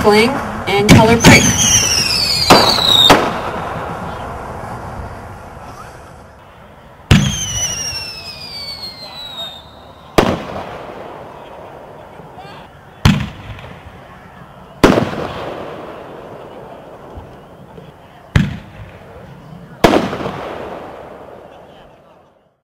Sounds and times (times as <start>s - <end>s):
Speech: 0.0s - 1.5s, 21.5s - 22.6s
Fireworks: 0.0s - 6.3s, 7.1s - 22.4s
Outside, urban or manmade: 0.0s - 22.6s.